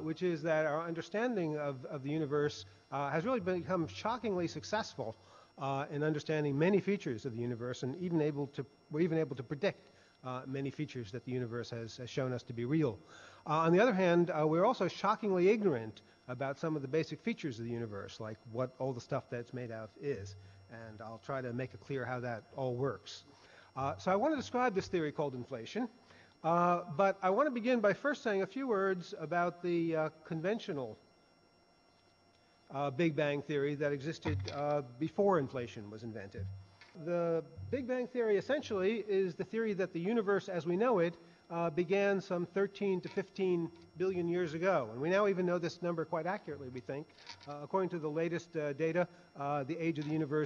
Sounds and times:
Speech: 0.0 - 31.0, 32.7 - 50.4.

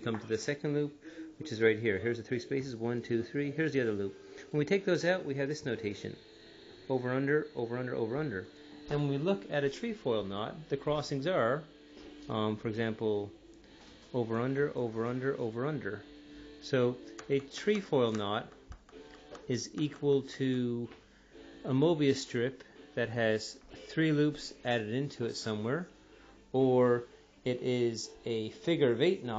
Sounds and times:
Speech: 0.0 - 6.2, 6.9 - 11.7, 12.3 - 13.4, 14.1 - 18.6, 19.4 - 21.0, 21.7 - 25.9, 26.5 - 29.3.

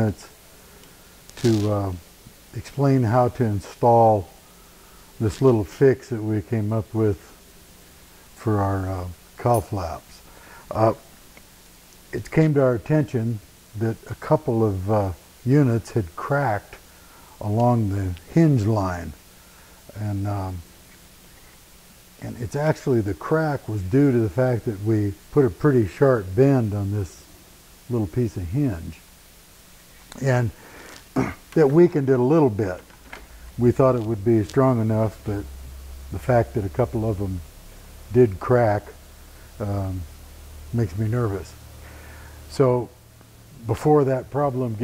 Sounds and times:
Speech: 0.0 - 0.4, 1.4 - 4.4, 5.2 - 7.4, 8.4 - 11.1, 12.1 - 16.8, 17.4 - 19.2, 19.9 - 20.7, 22.2 - 27.3, 27.9 - 29.0, 30.2 - 30.6, 31.2 - 32.8, 33.6 - 35.5, 36.1 - 37.5, 38.1 - 39.0, 39.6 - 40.1, 40.7 - 41.6, 42.5 - 43.0, 43.6 - 44.8.

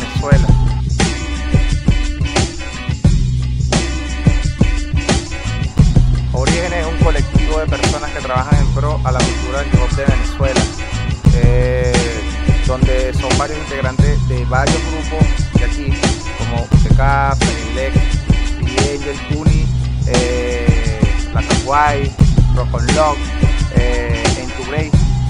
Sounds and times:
Speech: 0.0 - 0.6, 6.4 - 10.7, 11.3 - 18.0, 18.7 - 25.0
Music: 0.0 - 25.3.

